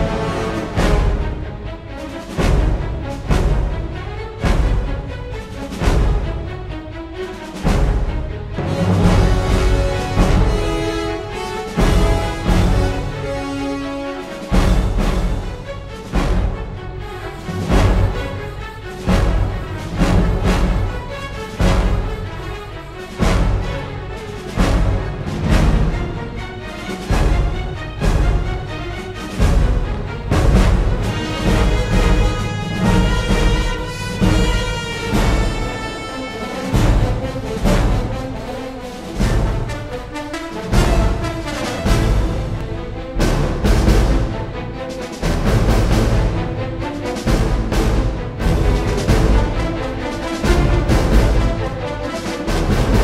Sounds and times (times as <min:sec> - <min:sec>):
Music: 0:00.0 - 0:53.0.